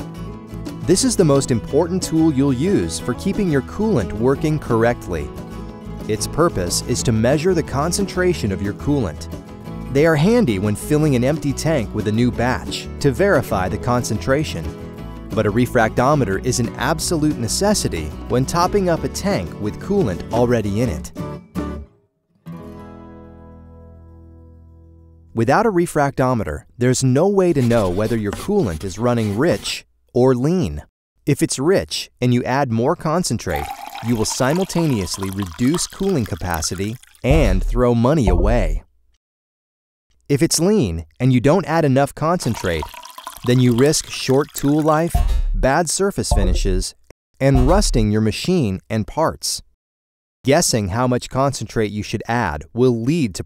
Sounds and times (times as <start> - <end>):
Music: 0.0 - 25.4, 46.3 - 46.8, 47.5 - 48.1
Speech: 0.9 - 5.4, 6.0 - 9.3, 9.9 - 14.7, 15.4 - 21.1, 25.4 - 38.9, 40.3 - 49.7, 50.5 - 53.4.